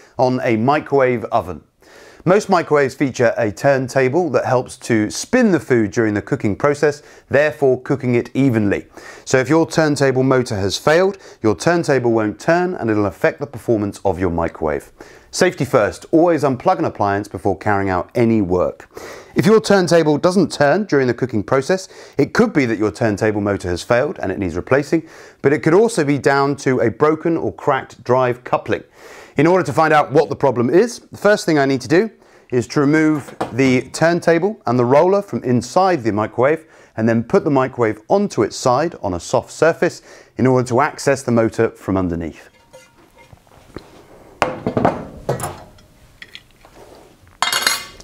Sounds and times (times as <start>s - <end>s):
Speech: 0.2s - 42.6s.